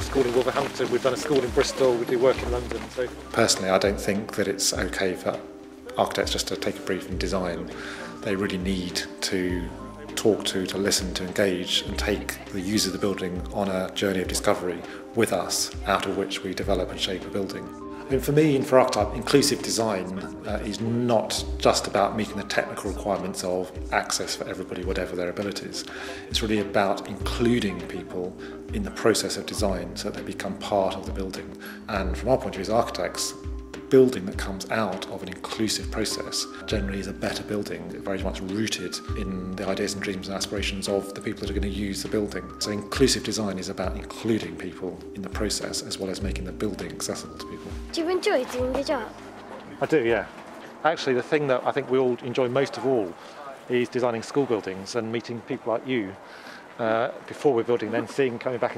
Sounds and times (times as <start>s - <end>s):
Speech: 0.0s - 56.2s, 56.8s - 58.7s.